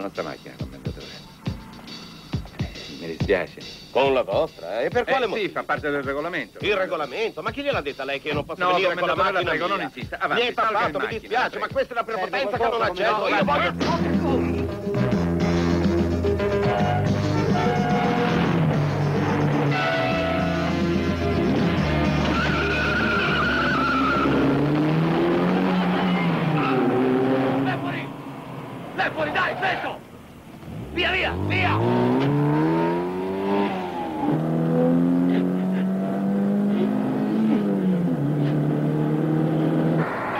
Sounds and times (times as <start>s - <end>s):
Music: 0.0s - 26.4s
Speech: 2.9s - 14.6s, 29.0s - 30.0s, 31.0s - 31.8s
Car: 16.7s - 40.3s.